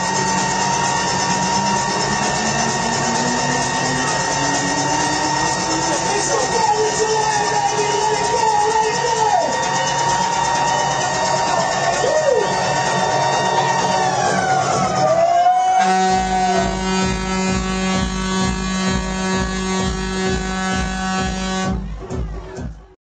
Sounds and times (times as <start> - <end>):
Air horn, truck horn: 0.0 - 9.2, 15.6 - 22.0
Music: 0.0 - 23.0.